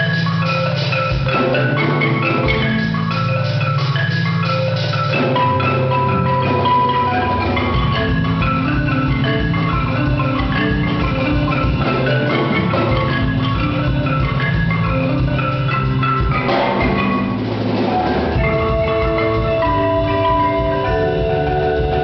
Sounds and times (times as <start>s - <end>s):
Glockenspiel: 0.0s - 17.6s, 18.2s - 22.0s
Marimba, xylophone: 0.0s - 22.0s.